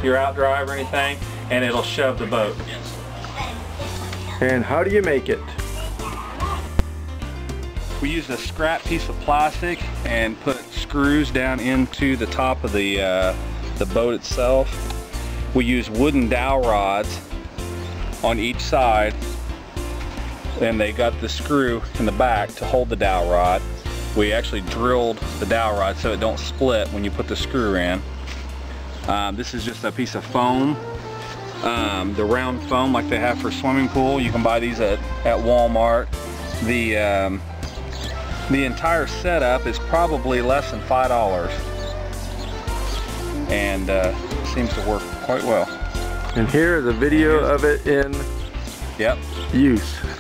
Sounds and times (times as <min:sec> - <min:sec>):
Speech: 0:00.0 - 0:05.6, 0:08.0 - 0:14.7, 0:15.6 - 0:17.2, 0:18.2 - 0:19.2, 0:20.6 - 0:23.6, 0:24.2 - 0:28.0, 0:29.1 - 0:30.8, 0:31.6 - 0:37.4, 0:38.5 - 0:41.7, 0:43.5 - 0:45.8, 0:46.4 - 0:48.2, 0:49.0 - 0:50.2
Music: 0:00.0 - 0:50.2.